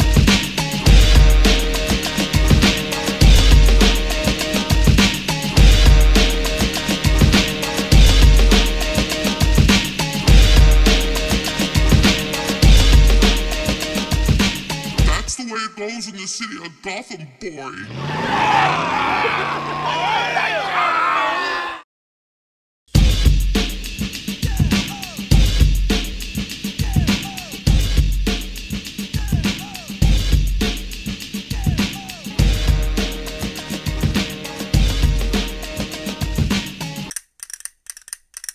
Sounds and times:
Hip hop music: 0.0 - 18.8, 23.7 - 37.1.

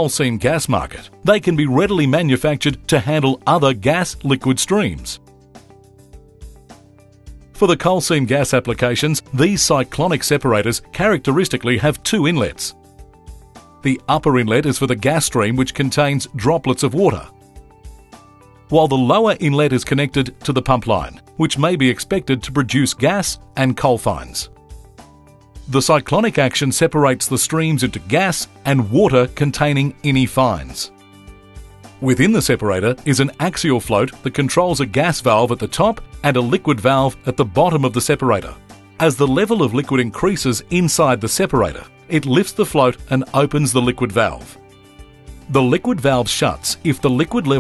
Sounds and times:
Speech: 0.0 - 5.2, 7.6 - 12.8, 13.8 - 17.3, 18.7 - 24.5, 25.7 - 30.9, 32.0 - 44.6, 45.5 - 47.6
Music: 0.0 - 47.6.

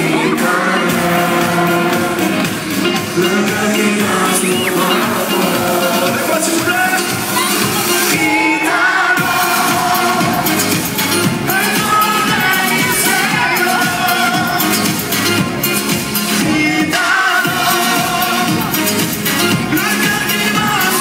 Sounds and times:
Disco: 0.0 - 21.0.

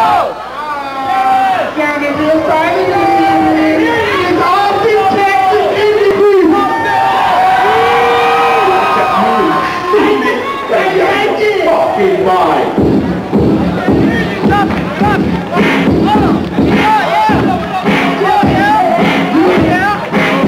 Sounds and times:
Cheering: 0.0 - 12.7, 13.8 - 20.4
Music: 12.6 - 20.4.

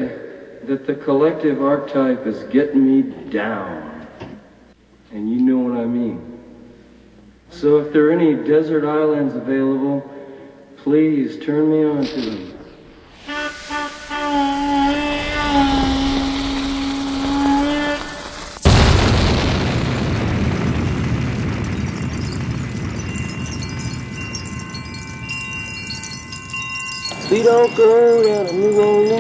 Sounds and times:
Speech: 0.0 - 4.1, 5.1 - 6.3, 7.5 - 10.1, 10.8 - 12.6.

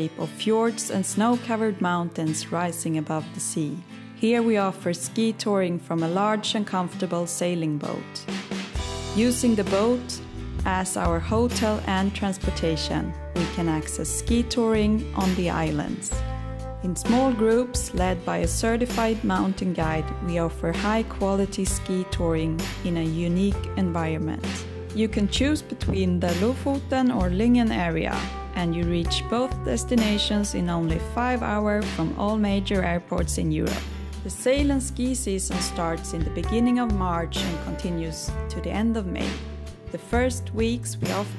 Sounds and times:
Speech: 0.0 - 8.3, 9.2 - 16.2, 16.8 - 41.3
Music: 0.0 - 41.3.

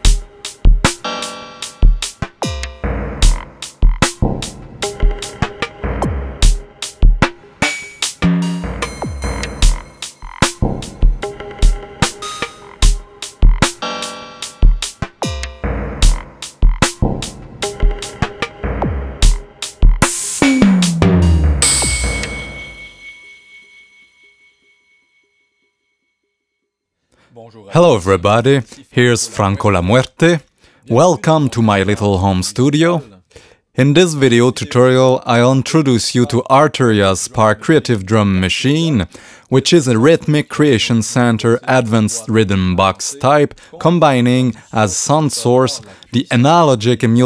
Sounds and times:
Speech: 27.3 - 47.2.

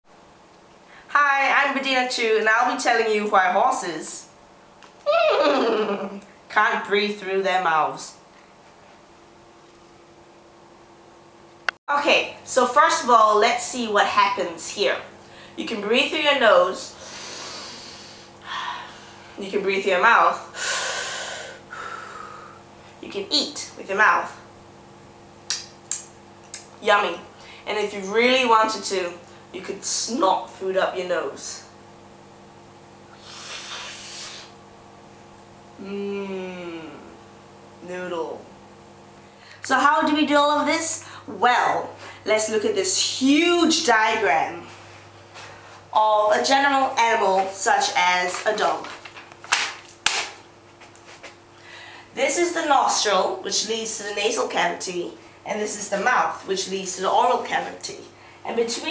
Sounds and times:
Speech: 1.1 - 4.3, 6.5 - 8.2, 11.9 - 17.0, 19.4 - 20.5, 23.0 - 24.4, 26.8 - 31.7, 37.8 - 38.5, 39.7 - 44.7, 46.0 - 49.0, 52.2 - 58.9.

